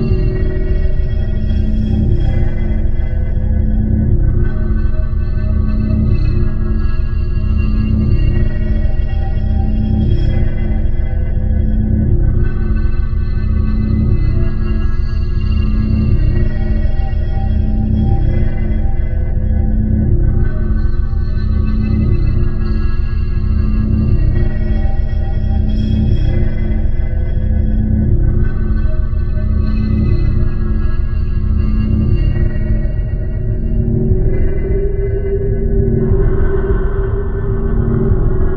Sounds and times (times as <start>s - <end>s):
Ambient music: 0.0s - 38.5s.